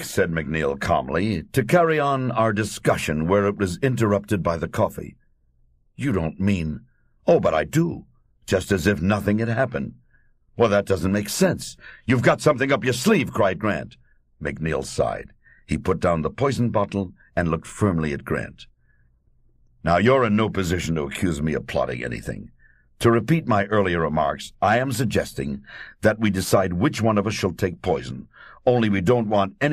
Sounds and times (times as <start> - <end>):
Speech: 0.0 - 5.2, 6.0 - 10.0, 10.6 - 18.7, 19.8 - 29.7.